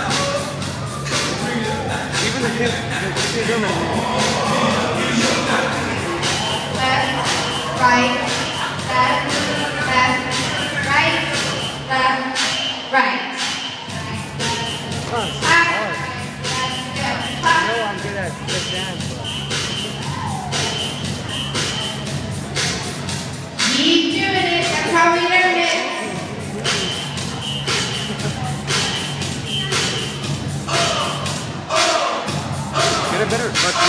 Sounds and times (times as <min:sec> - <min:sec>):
Music: 0:00.0 - 0:33.8
Speech: 0:01.2 - 0:12.2, 0:13.0 - 0:20.0, 0:23.7 - 0:27.2, 0:32.8 - 0:33.8.